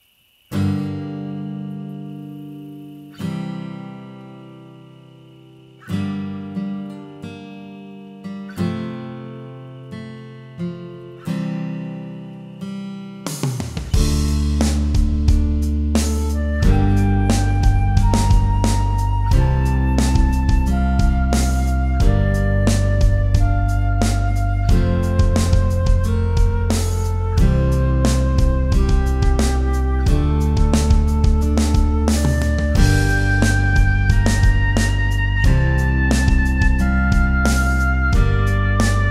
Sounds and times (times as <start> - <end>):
Music: 0.5 - 39.1.